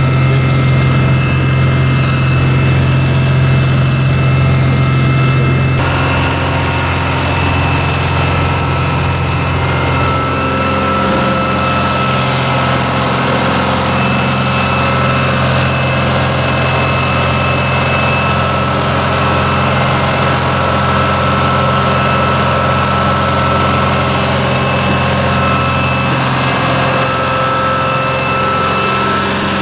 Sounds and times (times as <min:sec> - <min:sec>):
Motorboat, speedboat: 0:00.0 - 0:29.6.